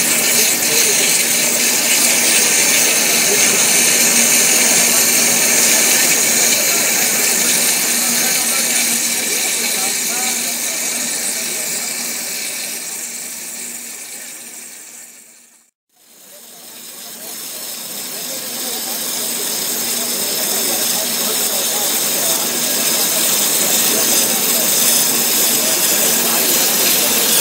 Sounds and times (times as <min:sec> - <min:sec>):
Speech: 0:00.0 - 0:13.2, 0:14.0 - 0:14.5, 0:16.0 - 0:27.4.